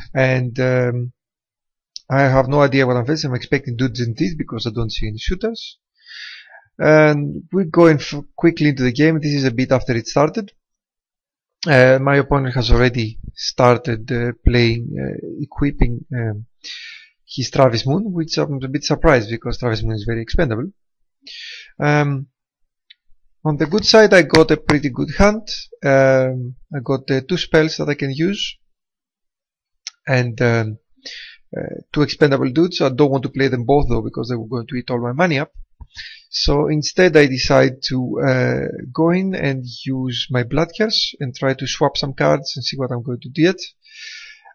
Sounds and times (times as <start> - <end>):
Speech: 0.0 - 1.2, 2.0 - 5.8, 6.8 - 10.6, 11.6 - 22.3, 23.5 - 28.6, 29.9 - 44.5.